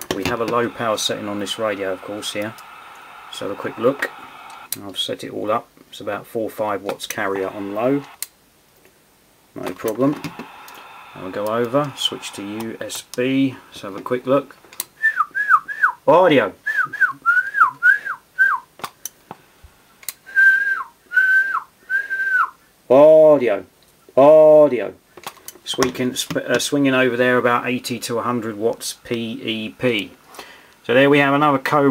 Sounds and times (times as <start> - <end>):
Whistling: 0.6 - 4.7, 10.3 - 13.9, 15.0 - 16.0, 16.7 - 18.7, 20.3 - 22.6.